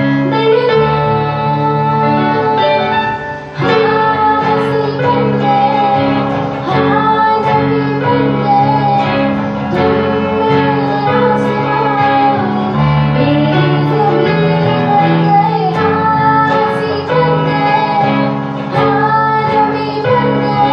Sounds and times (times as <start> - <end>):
Guitar: 0.0 - 20.7.